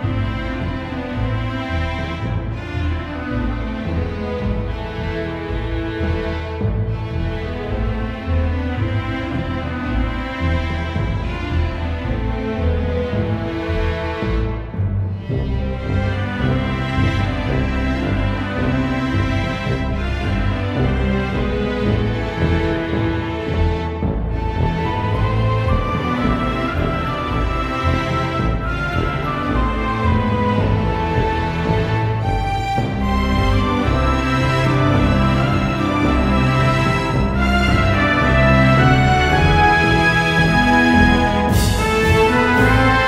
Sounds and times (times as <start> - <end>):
Theme music: 0.0 - 43.0.